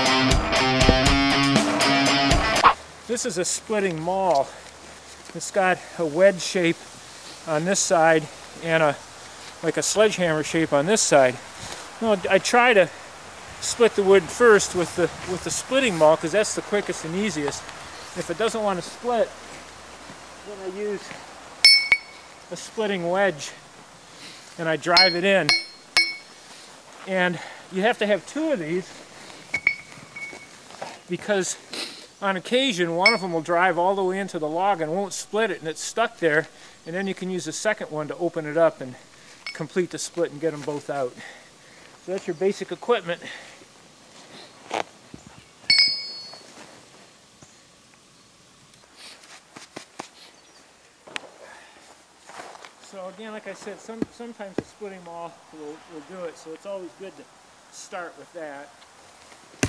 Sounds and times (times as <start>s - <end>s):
Speech: 3.1s - 4.6s, 5.3s - 6.8s, 7.5s - 9.0s, 9.6s - 11.4s, 12.0s - 13.0s, 13.6s - 17.6s, 18.2s - 19.4s, 20.4s - 21.2s, 22.5s - 23.6s, 24.6s - 25.5s, 27.0s - 29.0s, 31.1s - 31.6s, 32.2s - 39.0s, 39.6s - 41.3s, 42.1s - 43.3s, 52.8s - 58.8s.